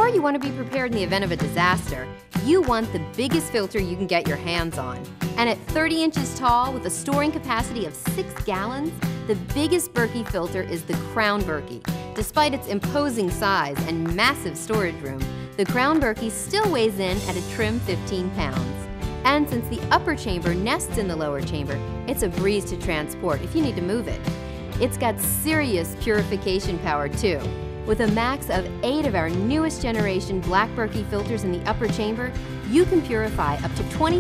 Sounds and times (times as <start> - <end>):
Speech: 0.0 - 24.2, 24.8 - 34.2
Music: 0.0 - 34.2.